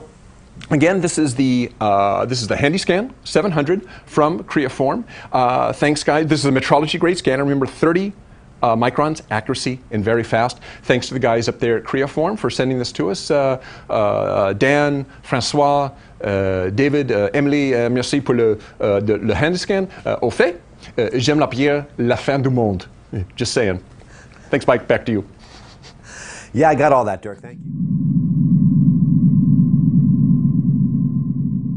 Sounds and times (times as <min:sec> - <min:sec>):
Speech: 0:00.6 - 0:23.9, 0:24.5 - 0:25.3, 0:26.6 - 0:27.6.